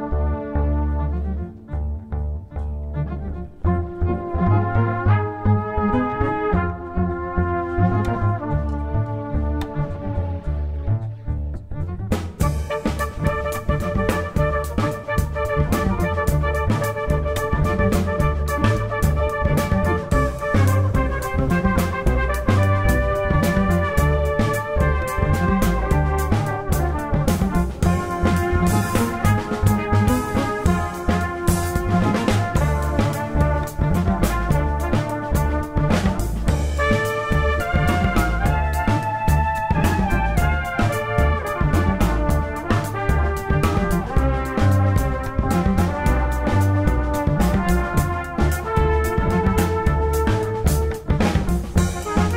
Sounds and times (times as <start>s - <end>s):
Inside, large room or hall: 3.8s - 52.3s.